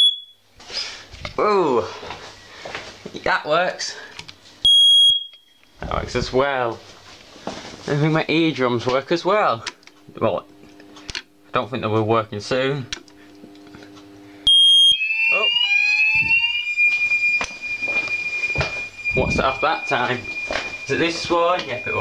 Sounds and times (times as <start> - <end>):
Smoke detector, smoke alarm: 0.0 - 0.4, 4.6 - 5.7, 14.4 - 22.0.